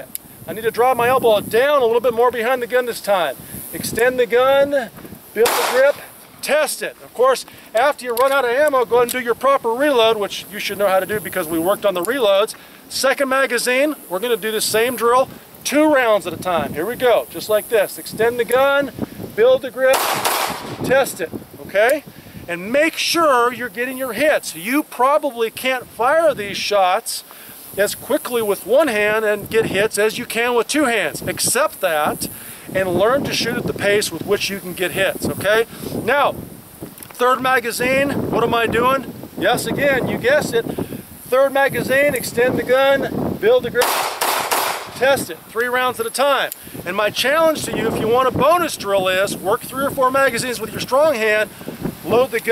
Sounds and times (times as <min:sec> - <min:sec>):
Speech: 0:00.0 - 0:20.0, 0:20.8 - 0:27.2, 0:27.8 - 0:36.4, 0:37.2 - 0:40.7, 0:41.3 - 0:43.9, 0:45.0 - 0:52.5
Outside, rural or natural: 0:00.0 - 0:52.5.